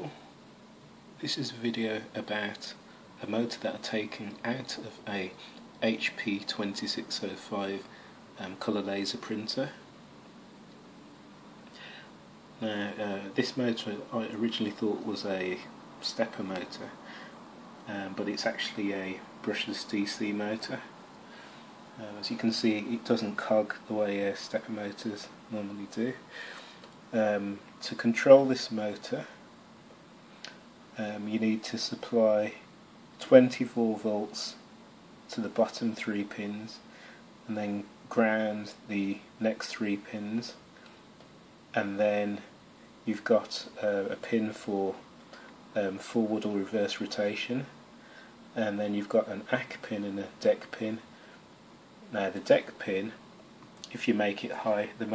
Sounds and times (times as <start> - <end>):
Speech: 1.2 - 9.9, 12.6 - 17.0, 17.8 - 21.0, 22.0 - 26.3, 27.1 - 29.4, 31.0 - 34.7, 35.3 - 40.6, 41.7 - 45.1, 45.7 - 47.8, 48.5 - 51.1, 52.1 - 53.2, 53.8 - 55.1.